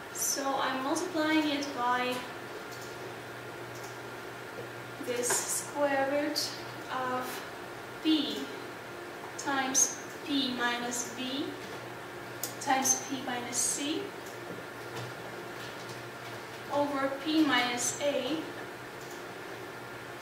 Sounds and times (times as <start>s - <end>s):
Speech: 0.2s - 2.4s, 5.0s - 8.6s, 9.4s - 11.6s, 12.6s - 14.2s, 16.7s - 18.6s.